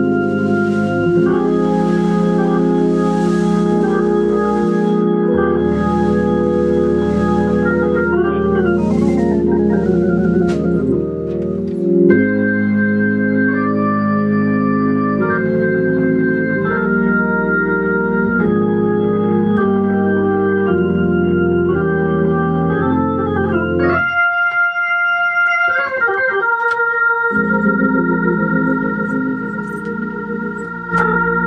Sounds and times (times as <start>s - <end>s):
Organ: 0.0s - 31.4s.